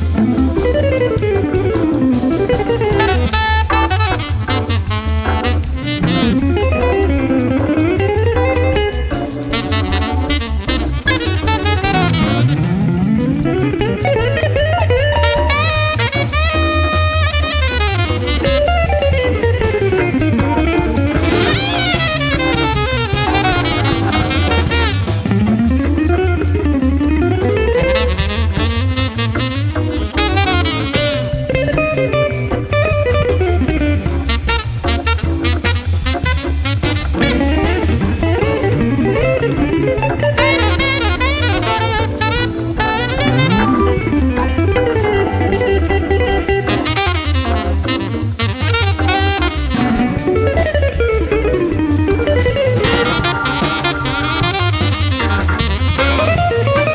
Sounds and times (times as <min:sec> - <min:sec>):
Electric guitar: 0:00.0 - 0:56.9.